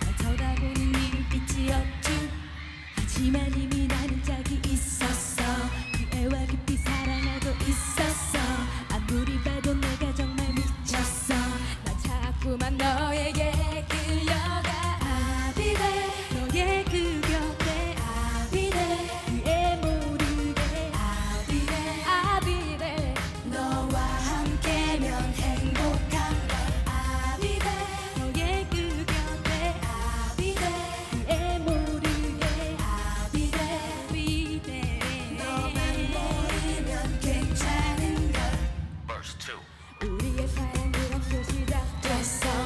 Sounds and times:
Dance music: 0:00.0 - 0:42.6
Soundtrack music: 0:00.0 - 0:42.6.

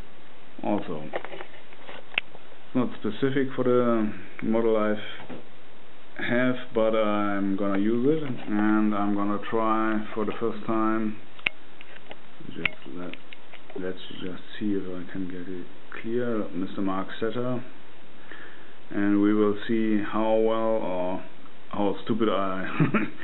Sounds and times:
Speech: 0:00.6 - 0:01.2, 0:02.7 - 0:05.3, 0:06.2 - 0:11.2, 0:12.4 - 0:17.8, 0:18.9 - 0:23.0.

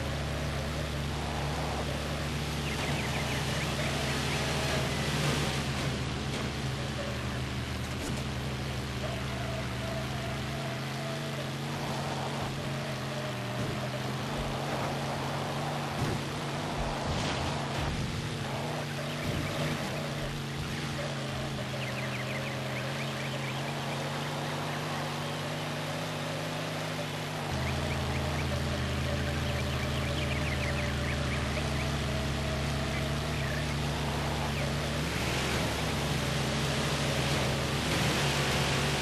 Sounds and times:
Vehicle: 0:00.0 - 0:39.0.

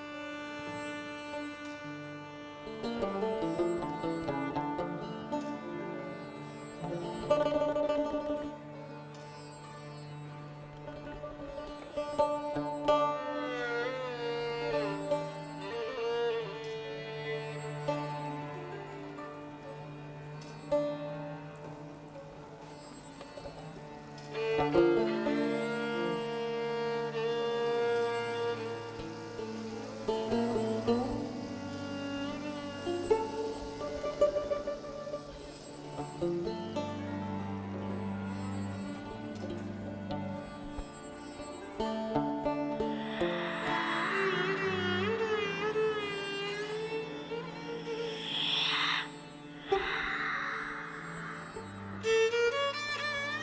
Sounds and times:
Violin, fiddle: 0:00.0 - 0:53.4.

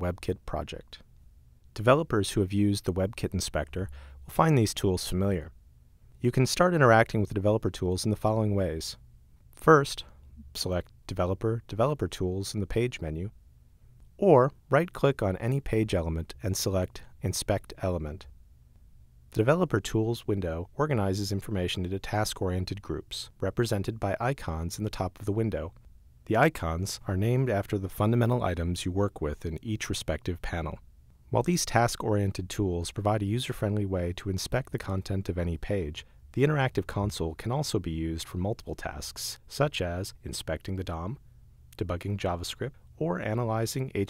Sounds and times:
Speech: 0:00.0 - 0:01.0, 0:01.7 - 0:05.6, 0:06.2 - 0:09.0, 0:09.6 - 0:13.4, 0:14.2 - 0:18.3, 0:19.3 - 0:44.1.

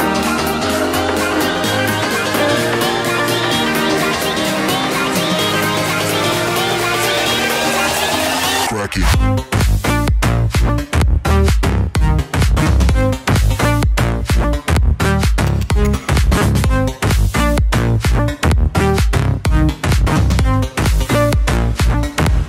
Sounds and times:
Music: 0:00.0 - 0:22.4
Speech: 0:08.6 - 0:09.2.

